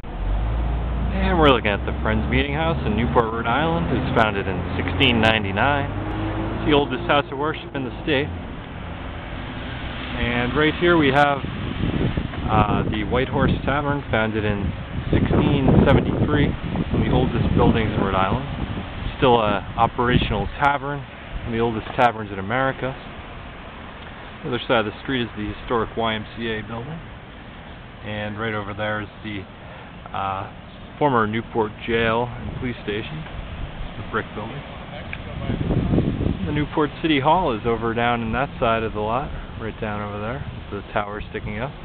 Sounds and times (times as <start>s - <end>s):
Speech: 1.1s - 6.0s, 6.6s - 8.4s, 10.2s - 11.4s, 12.5s - 18.5s, 19.1s - 23.1s, 24.4s - 27.0s, 28.0s - 29.5s, 30.1s - 33.3s, 34.0s - 35.7s, 36.4s - 41.8s.